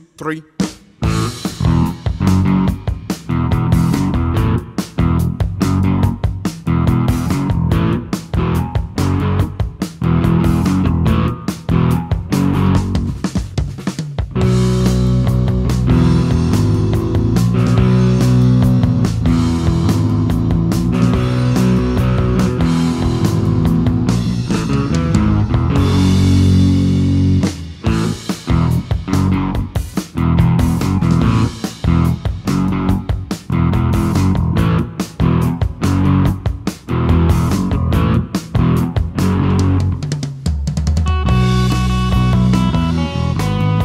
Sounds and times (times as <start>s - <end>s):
Electric guitar: 1.0s - 43.8s
Strum: 14.4s - 40.2s, 41.0s - 43.8s.